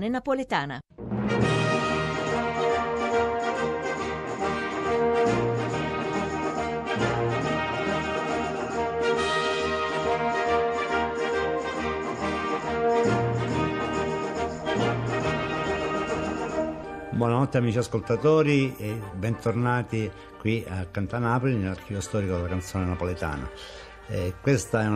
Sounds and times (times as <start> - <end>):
Orchestra: 1.0 - 24.9.